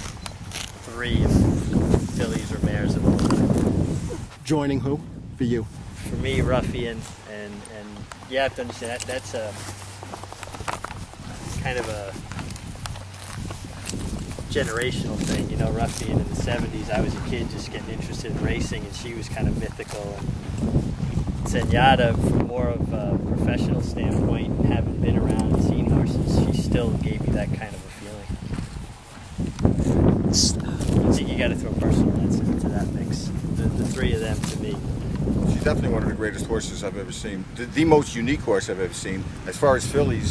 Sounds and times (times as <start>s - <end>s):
Speech: 0.8s - 1.5s, 2.2s - 3.1s, 4.4s - 9.6s, 11.6s - 12.2s, 14.5s - 20.2s, 21.5s - 28.3s, 30.3s - 34.8s, 35.5s - 40.3s.